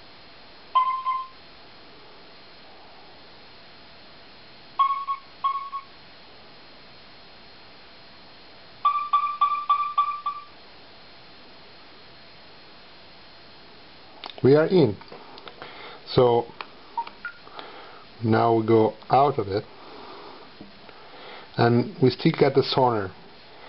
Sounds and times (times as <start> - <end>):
Sonar: 0.8 - 1.4, 4.8 - 5.9, 8.8 - 10.6.